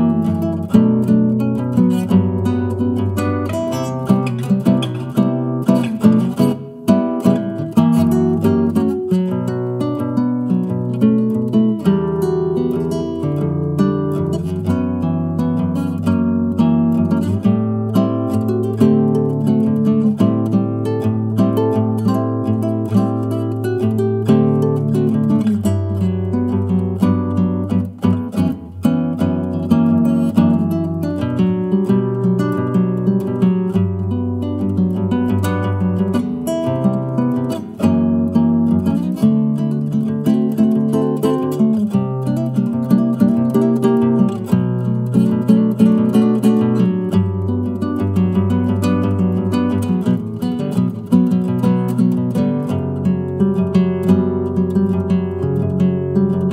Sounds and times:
Acoustic guitar: 0.0 - 56.5.

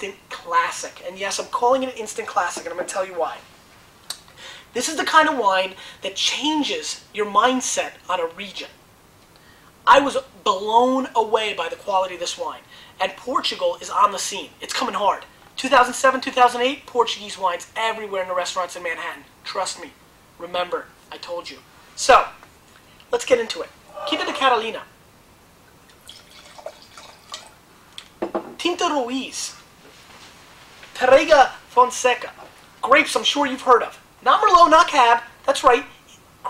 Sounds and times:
Speech: 0.0 - 3.4, 4.7 - 8.8, 9.8 - 22.4, 23.1 - 24.9, 28.6 - 29.6, 31.0 - 36.4
Inside, small room: 0.0 - 36.4.

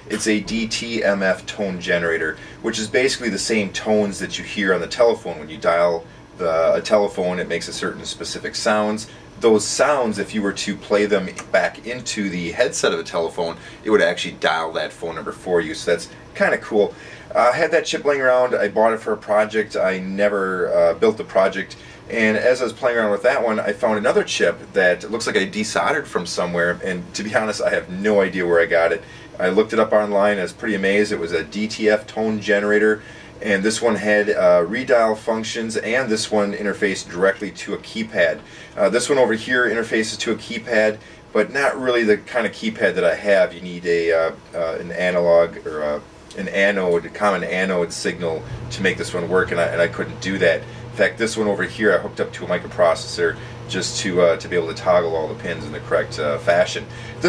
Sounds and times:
Speech: 0.0 - 57.2.

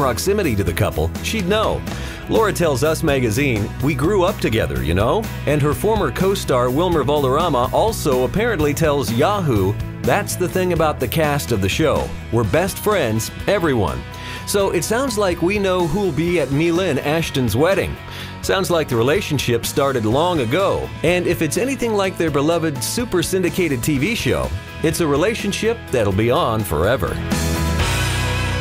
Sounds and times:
Speech: 0.0 - 27.2
Music: 0.0 - 28.6.

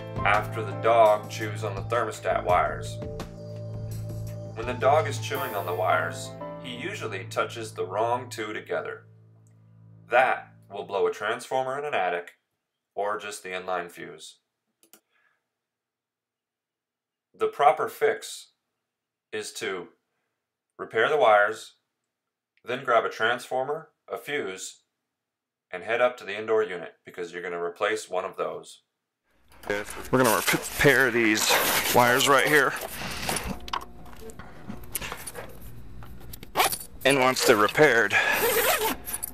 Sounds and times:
Speech: 0.2 - 3.0, 4.6 - 9.0, 10.1 - 12.4, 13.0 - 14.4, 17.4 - 18.6, 19.4 - 20.0, 20.8 - 21.8, 22.7 - 24.8, 25.7 - 28.8, 29.7 - 32.8, 37.0 - 38.4.

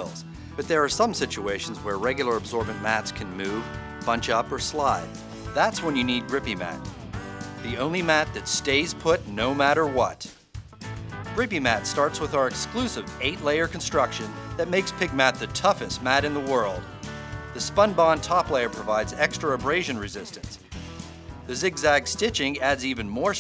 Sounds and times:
Speech: 0.0 - 6.8, 7.6 - 10.3, 11.4 - 16.8, 17.6 - 20.6, 21.5 - 23.4
Music: 0.0 - 23.4.

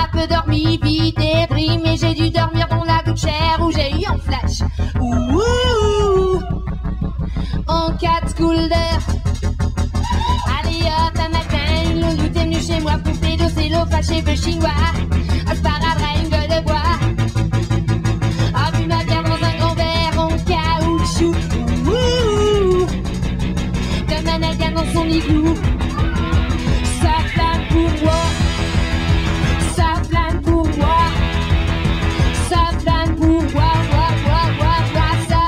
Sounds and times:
Music: 0.0 - 35.4.

